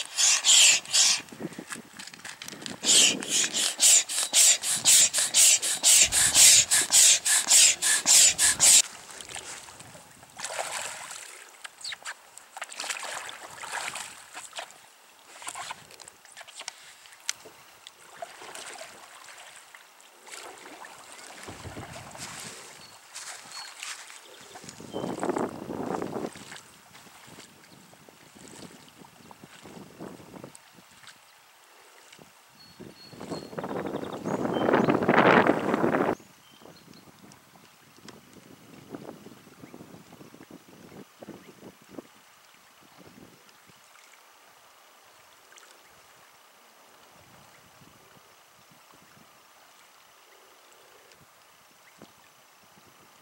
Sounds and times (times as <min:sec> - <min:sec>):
Rowboat, canoe, kayak: 0:00.0 - 0:53.2.